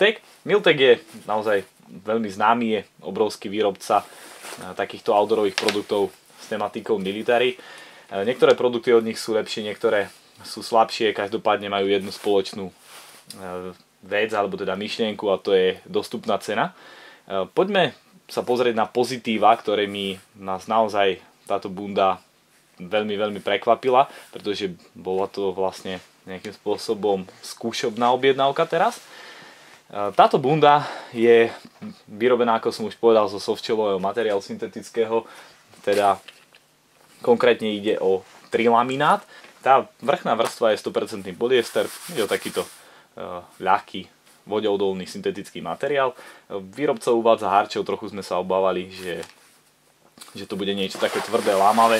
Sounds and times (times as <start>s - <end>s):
Speech: 0.0s - 29.0s, 29.9s - 36.3s, 37.2s - 49.4s, 50.2s - 51.9s.